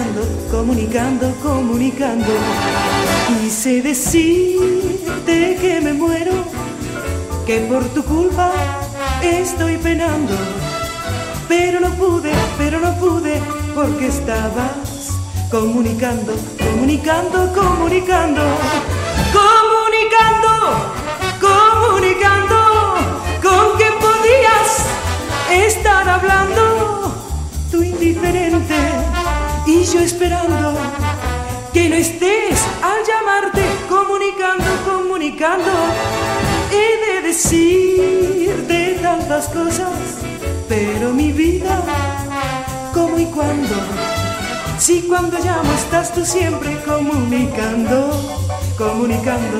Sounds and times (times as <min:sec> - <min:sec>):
Music: 0:00.0 - 0:49.6.